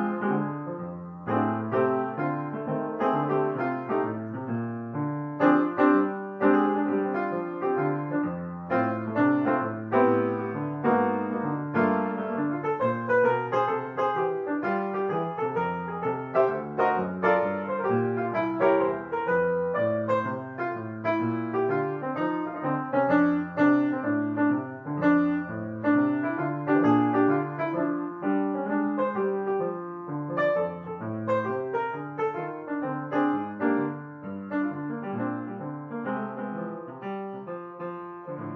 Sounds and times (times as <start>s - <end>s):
Keyboard (musical): 0.0s - 38.5s.